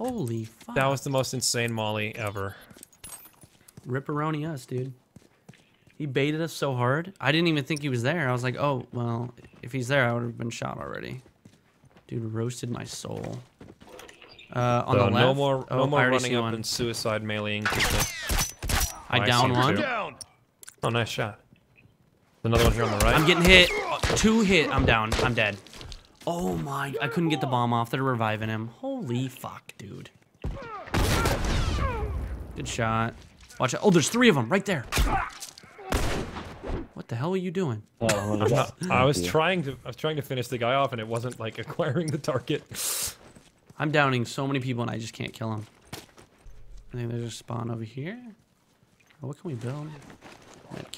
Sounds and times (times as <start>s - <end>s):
Speech: 12.1s - 13.5s, 14.6s - 17.7s, 19.1s - 20.2s, 22.5s - 25.6s, 26.3s - 30.1s, 37.0s - 42.7s, 43.8s - 45.6s, 49.2s - 50.0s.